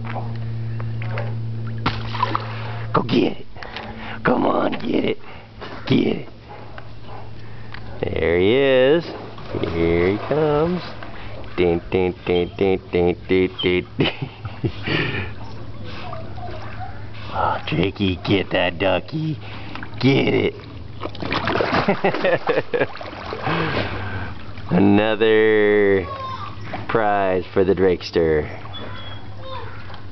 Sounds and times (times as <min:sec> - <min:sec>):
Splash, splatter: 0:01.8 - 0:02.5, 0:09.4 - 0:11.0, 0:21.0 - 0:24.0
Speech: 0:08.0 - 0:11.0, 0:11.6 - 0:13.9, 0:17.4 - 0:19.4, 0:24.7 - 0:28.5.